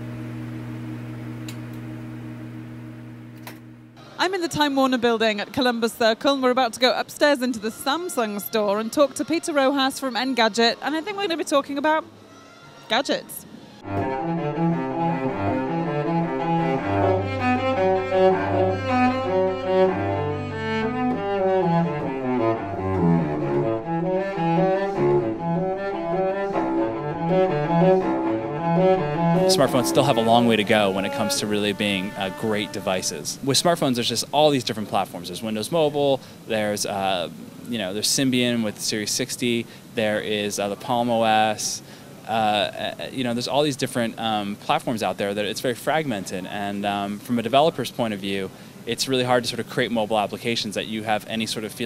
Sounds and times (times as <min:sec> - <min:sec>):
Double bass: 0:13.8 - 0:33.5.